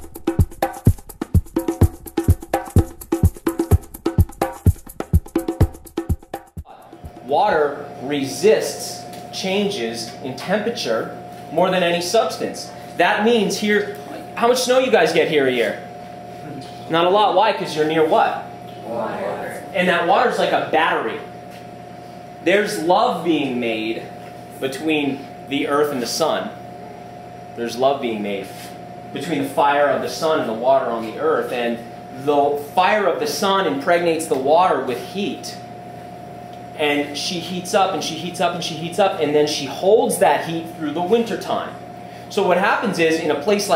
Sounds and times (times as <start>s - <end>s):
Speech: 6.7s - 15.8s, 16.5s - 21.3s, 22.4s - 26.6s, 27.6s - 35.6s, 36.8s - 43.7s.